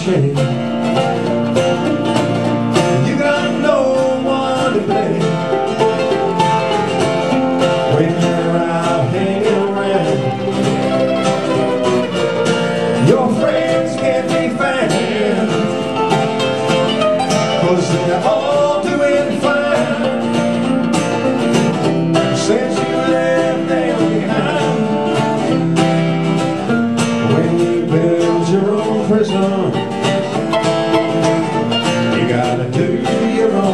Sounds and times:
Banjo: 0:00.0 - 0:33.7
Country: 0:00.0 - 0:33.7
Singing: 0:07.9 - 0:10.5, 0:13.0 - 0:16.0, 0:17.6 - 0:20.3, 0:22.3 - 0:25.2, 0:32.2 - 0:33.7.

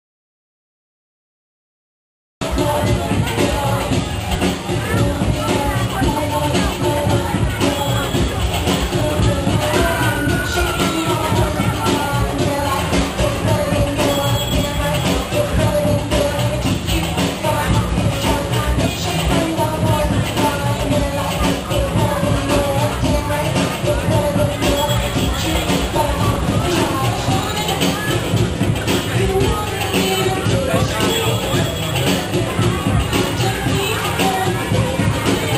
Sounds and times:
Music: 0:02.4 - 0:35.5
Speech: 0:02.4 - 0:35.5.

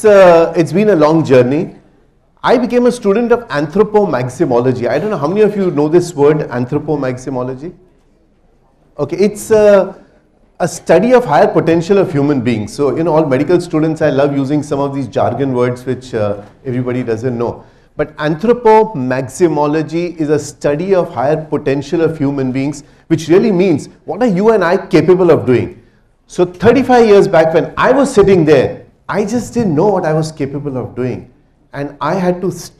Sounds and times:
Male speech, man speaking: 0:00.0 - 0:01.8, 0:02.4 - 0:07.8, 0:09.0 - 0:10.0, 0:10.6 - 0:32.7
Narration, monologue: 0:00.0 - 0:32.7.

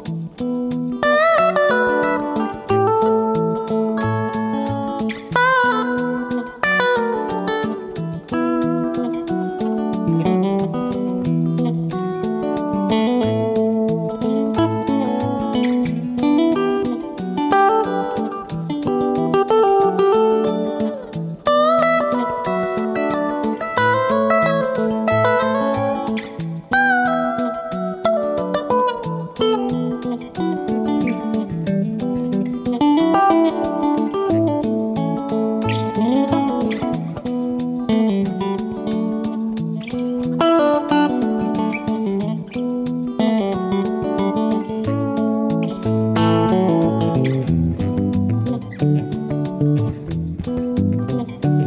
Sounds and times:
Bass guitar: 0:00.0 - 0:51.6
Strum: 0:00.0 - 0:51.6.

